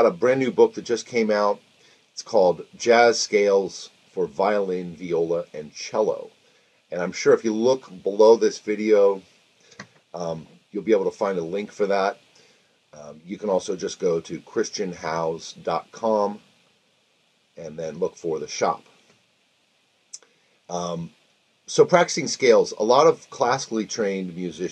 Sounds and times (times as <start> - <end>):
Speech: 0.0 - 1.6, 2.2 - 6.3, 6.9 - 9.2, 10.2 - 12.2, 13.0 - 16.4, 17.6 - 18.9, 20.7 - 21.1, 21.7 - 24.7.